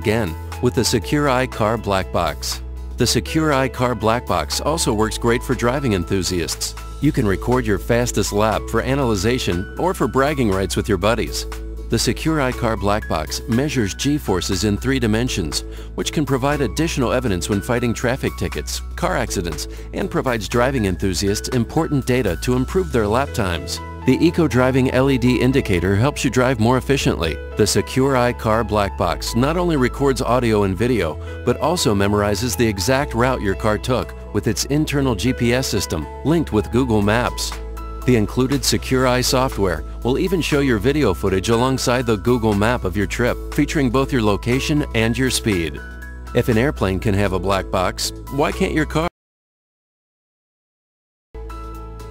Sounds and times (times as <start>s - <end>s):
Speech: 0.0s - 45.8s, 46.4s - 49.1s
Music: 0.0s - 49.1s, 51.4s - 52.1s.